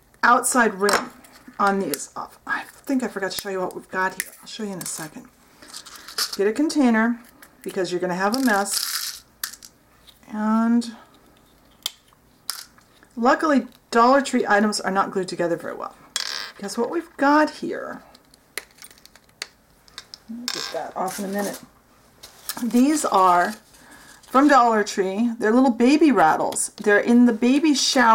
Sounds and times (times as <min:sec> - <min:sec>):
Inside, small room: 0:00.0 - 0:28.1
Speech: 0:00.2 - 0:05.3, 0:06.4 - 0:08.8, 0:10.3 - 0:11.0, 0:16.6 - 0:18.0, 0:20.3 - 0:21.7, 0:22.6 - 0:23.6, 0:24.3 - 0:28.1.